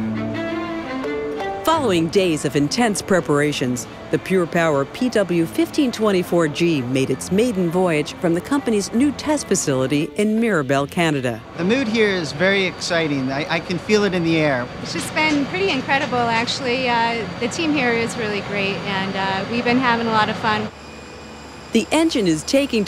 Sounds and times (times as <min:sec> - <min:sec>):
Music: 0:00.0 - 0:20.8
Aircraft: 0:14.6 - 0:22.8
Speech: 0:15.2 - 0:20.7, 0:21.8 - 0:22.8.